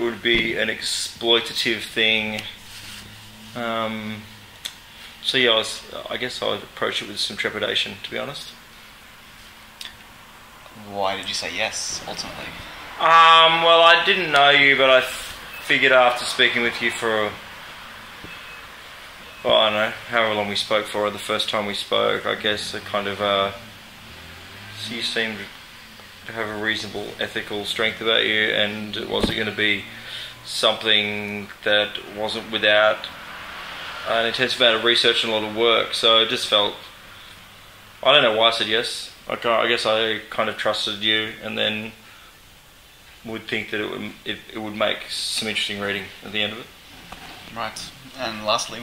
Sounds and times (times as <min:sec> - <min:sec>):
Speech: 0:00.0 - 0:02.6, 0:03.6 - 0:04.3, 0:05.2 - 0:08.6, 0:10.7 - 0:17.4, 0:19.4 - 0:23.6, 0:24.8 - 0:25.5, 0:26.3 - 0:33.1, 0:34.1 - 0:36.9, 0:38.0 - 0:42.0, 0:43.2 - 0:46.7, 0:47.5 - 0:48.8.